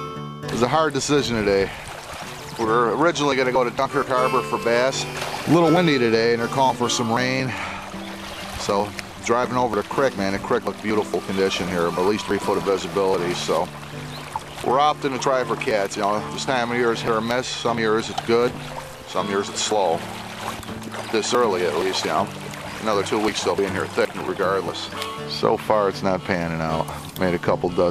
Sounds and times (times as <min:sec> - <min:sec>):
Music: 0:00.0 - 0:27.9
Speech: 0:00.5 - 0:01.7, 0:02.6 - 0:07.5, 0:08.6 - 0:13.7, 0:14.6 - 0:18.5, 0:19.1 - 0:20.0, 0:21.1 - 0:27.9.